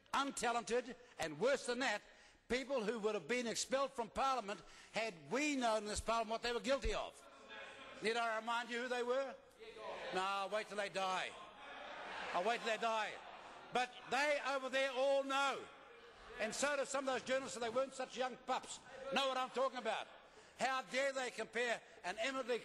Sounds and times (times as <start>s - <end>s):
Male speech, man speaking: 0.0s - 11.5s, 12.3s - 22.6s
Conversation: 0.3s - 22.6s.